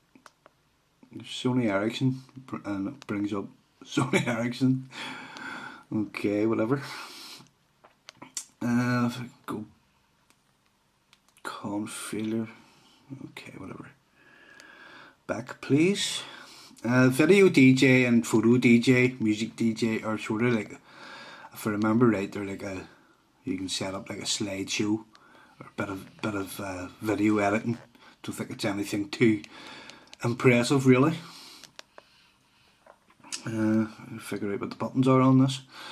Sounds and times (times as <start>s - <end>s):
Speech: 1.1s - 4.9s, 5.9s - 7.0s, 8.2s - 9.8s, 11.4s - 14.0s, 15.3s - 20.9s, 21.5s - 29.5s, 30.2s - 31.3s, 33.3s - 35.7s.